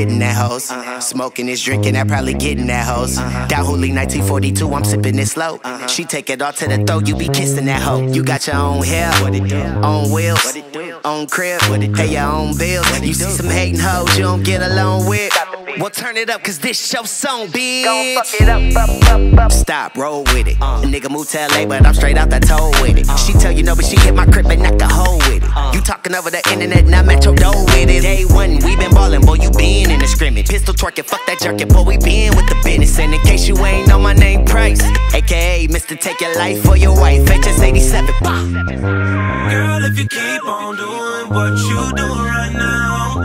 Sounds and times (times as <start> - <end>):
Music: 0.0 - 0.6, 1.6 - 5.4, 6.6 - 15.5, 18.3 - 43.2.